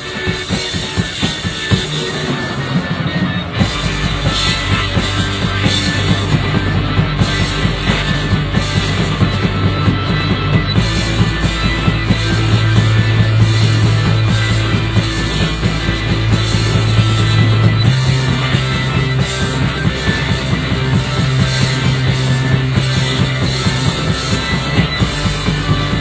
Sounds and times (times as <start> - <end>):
Musical instrument: 0.0 - 26.0
Progressive rock: 0.0 - 26.0.